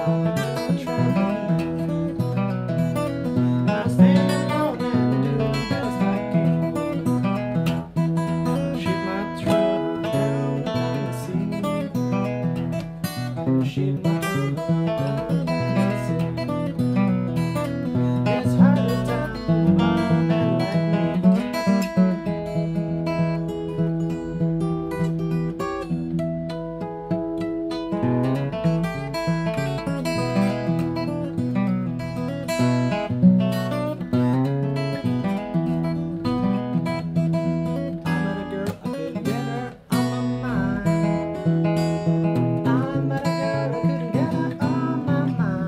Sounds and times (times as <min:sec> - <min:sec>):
Blues: 0:00.0 - 0:45.6.